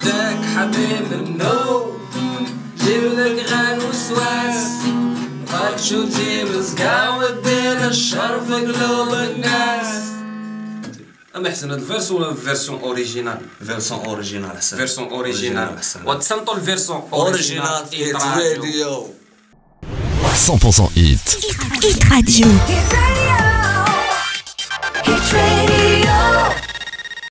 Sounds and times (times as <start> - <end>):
Music: 0.0 - 11.1, 21.6 - 27.3
Speech: 11.4 - 19.2, 20.2 - 22.8.